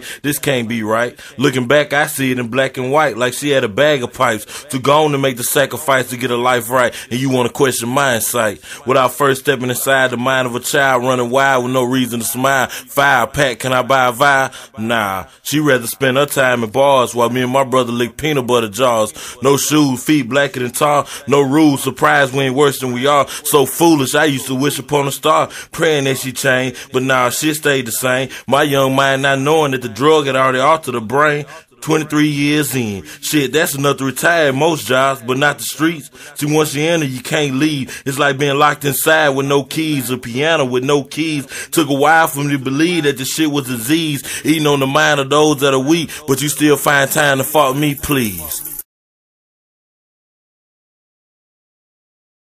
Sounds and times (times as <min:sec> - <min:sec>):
Speech: 0:00.0 - 0:48.8.